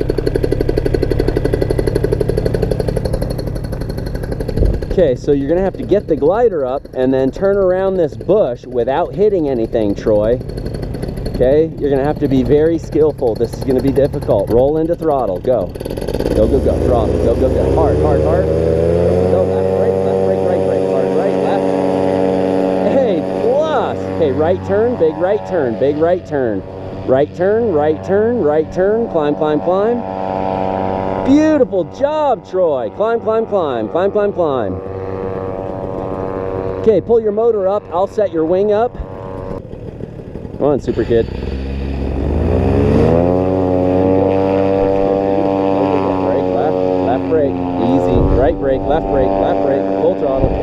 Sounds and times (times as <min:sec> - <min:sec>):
Speech: 0:04.9 - 0:10.4, 0:11.4 - 0:15.7, 0:16.4 - 0:18.5, 0:19.3 - 0:22.2, 0:22.8 - 0:30.0, 0:31.3 - 0:34.8, 0:36.8 - 0:39.0, 0:40.6 - 0:41.3, 0:45.7 - 0:50.6.